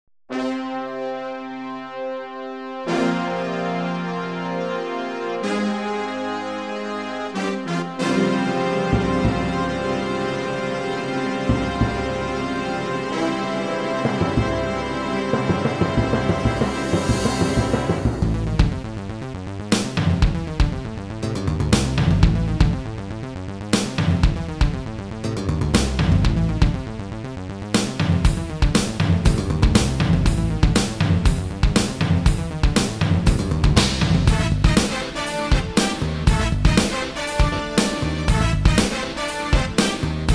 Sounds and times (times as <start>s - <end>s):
Theme music: 0.3s - 19.4s, 28.3s - 40.3s.